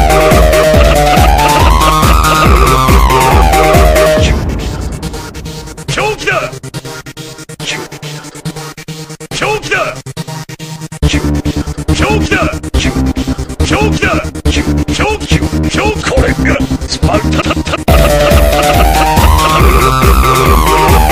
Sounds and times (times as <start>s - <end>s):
Techno: 0.0s - 21.1s.